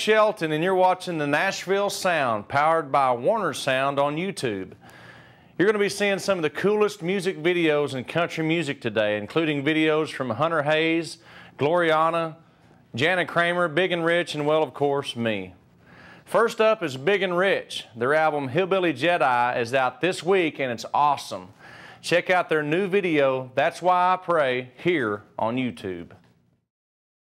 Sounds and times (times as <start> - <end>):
Speech: 0.0 - 4.8, 5.6 - 15.6, 16.3 - 26.3.